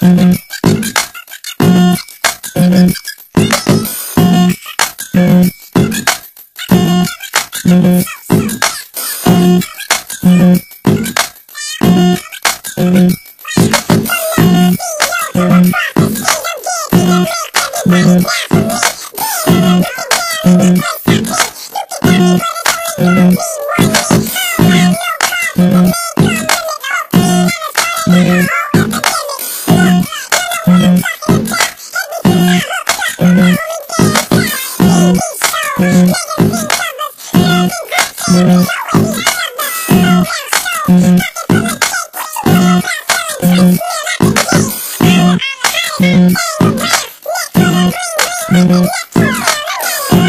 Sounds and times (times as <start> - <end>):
Music: 0.0 - 50.2.